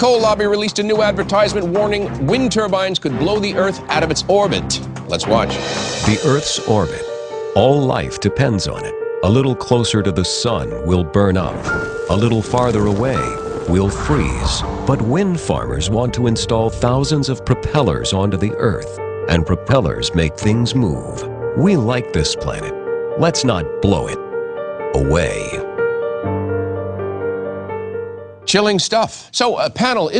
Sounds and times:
Speech: 0:00.0 - 0:24.2, 0:24.9 - 0:25.6, 0:28.5 - 0:30.1
Music: 0:00.0 - 0:30.1.

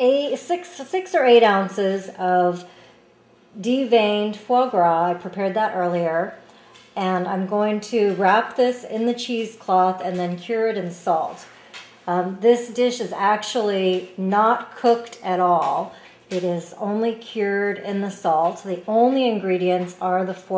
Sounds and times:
Speech: 0:00.0 - 0:02.7, 0:03.6 - 0:06.4, 0:07.0 - 0:11.5, 0:12.1 - 0:20.5.

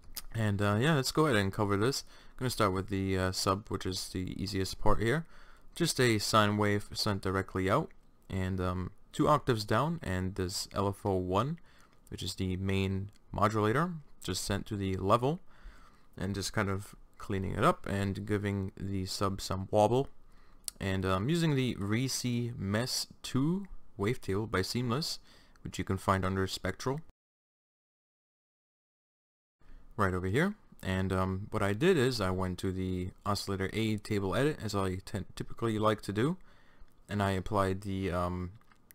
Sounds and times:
Speech: 0:00.2 - 0:15.5, 0:16.2 - 0:27.1, 0:30.0 - 0:36.4, 0:37.1 - 0:38.9.

